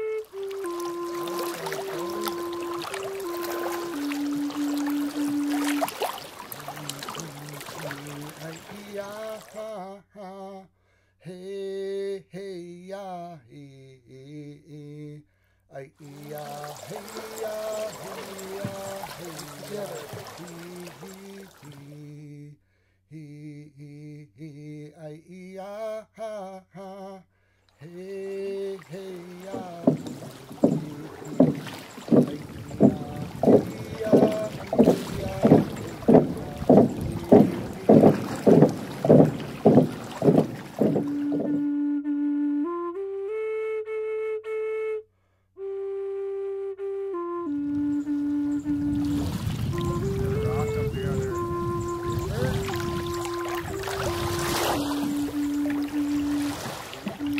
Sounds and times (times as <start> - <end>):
Rowboat, canoe, kayak: 0.0 - 9.8, 16.0 - 22.2, 27.9 - 42.0, 47.1 - 57.3.